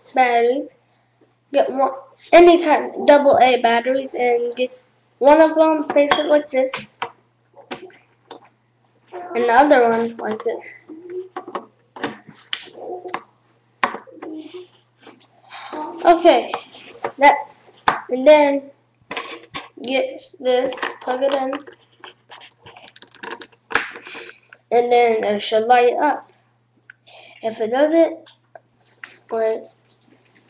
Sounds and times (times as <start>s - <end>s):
Speech: 1.6s - 6.9s, 9.2s - 11.3s, 19.8s - 21.7s, 24.7s - 26.3s, 27.4s - 28.3s, 29.3s - 29.8s.